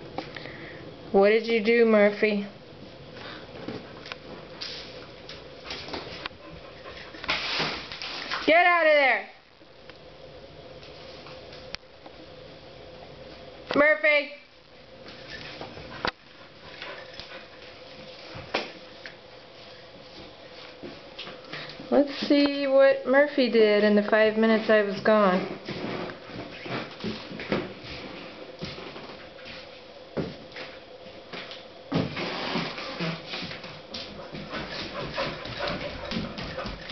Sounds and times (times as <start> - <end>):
Speech: 1.1 - 2.6, 8.5 - 9.4, 13.7 - 14.5, 21.9 - 25.6.